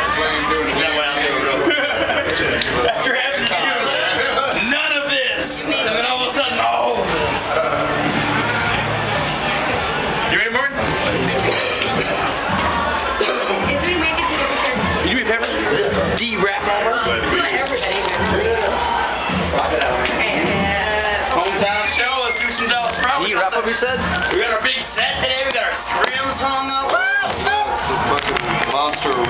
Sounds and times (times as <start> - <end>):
Music: 5.7 - 29.3.